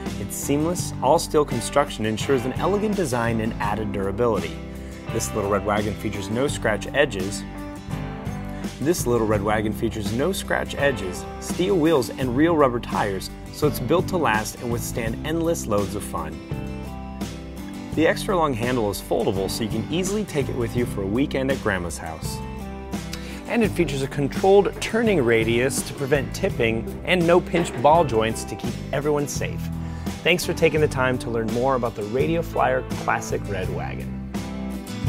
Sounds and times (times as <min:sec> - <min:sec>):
Speech: 0:00.0 - 0:07.4, 0:08.8 - 0:16.4, 0:18.0 - 0:22.4, 0:23.4 - 0:34.1
Music: 0:00.0 - 0:35.0.